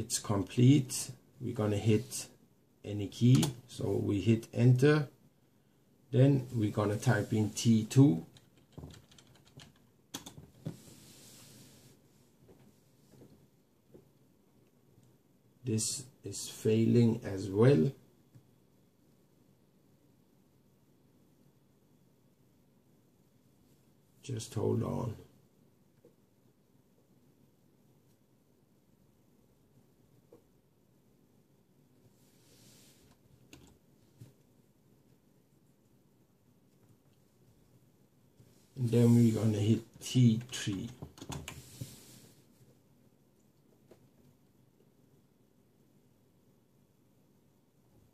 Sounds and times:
Computer keyboard: 0:08.3 - 0:10.5, 0:33.5 - 0:33.8, 0:40.4 - 0:41.6.

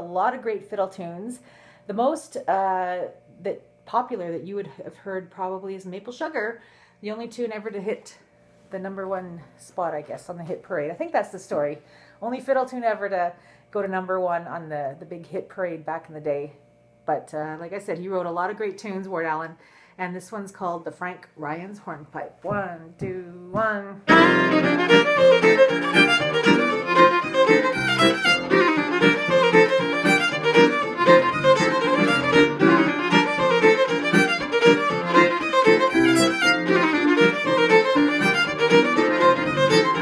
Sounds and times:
Speech: 0:00.0 - 0:24.1
Violin, fiddle: 0:24.1 - 0:40.0.

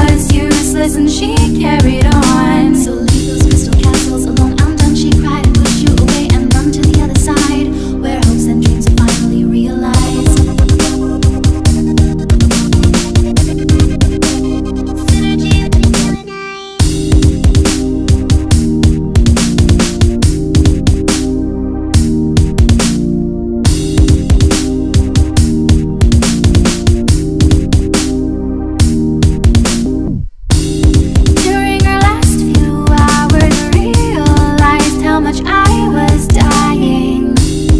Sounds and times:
Dubstep: 0:01.4 - 0:21.3.

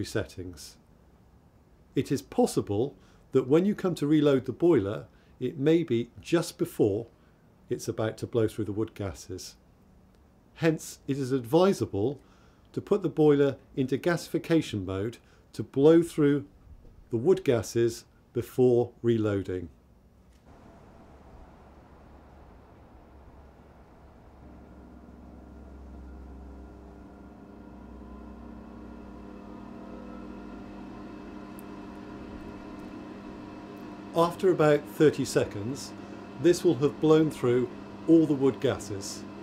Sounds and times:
Speech: 0:00.0 - 0:00.8, 0:02.0 - 0:07.1, 0:07.7 - 0:09.6, 0:10.6 - 0:16.5, 0:17.1 - 0:19.8, 0:34.2 - 0:39.3.

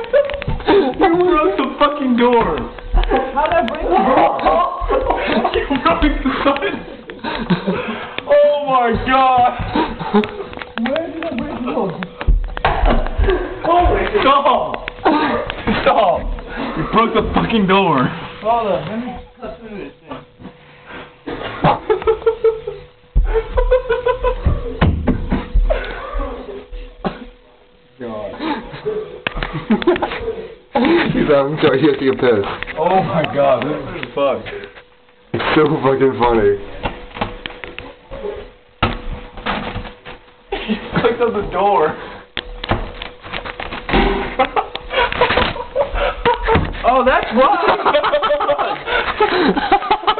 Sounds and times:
Inside, small room: 0:00.0 - 0:50.1.

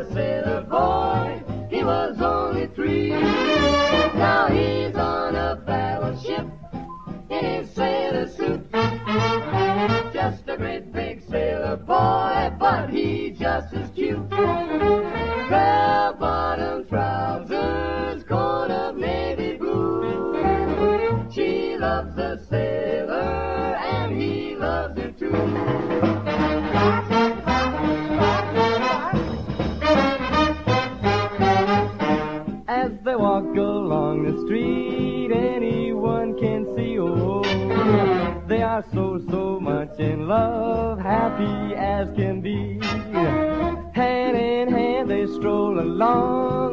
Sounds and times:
Music: 0:00.0 - 0:46.7.

